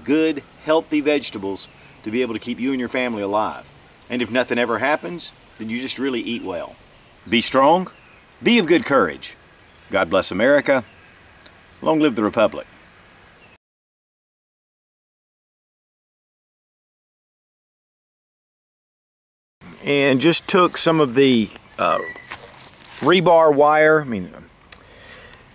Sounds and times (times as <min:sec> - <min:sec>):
Speech: 0:00.0 - 0:10.9, 0:11.8 - 0:12.7, 0:19.7 - 0:22.2, 0:23.0 - 0:24.5
Outside, rural or natural: 0:00.0 - 0:13.6, 0:19.6 - 0:25.5.